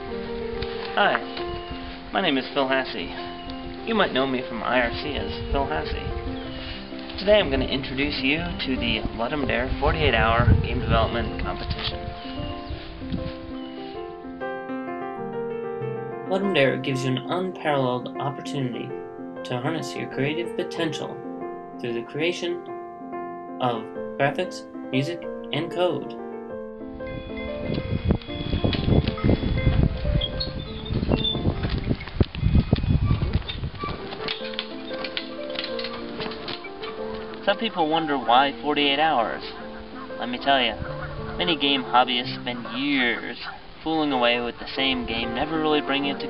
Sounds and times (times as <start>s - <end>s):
Music: 0.0s - 46.2s
Speech: 3.9s - 6.0s, 7.2s - 11.7s, 16.3s - 18.9s, 19.5s - 21.2s, 21.8s - 22.7s, 23.6s - 26.2s, 37.5s - 39.5s, 40.2s - 40.8s, 41.4s - 46.2s
Animal: 38.0s - 43.6s.